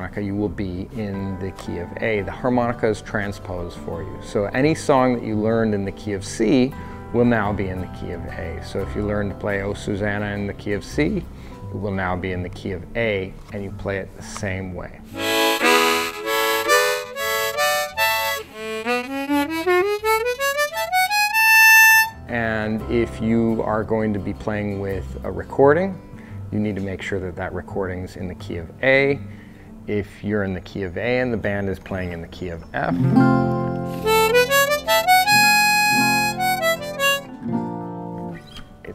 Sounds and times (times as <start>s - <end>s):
Speech: 0.0s - 15.1s, 22.3s - 29.2s, 29.9s - 33.0s
Guitar: 0.0s - 38.9s
Harmonica: 15.1s - 22.2s, 32.9s - 37.4s.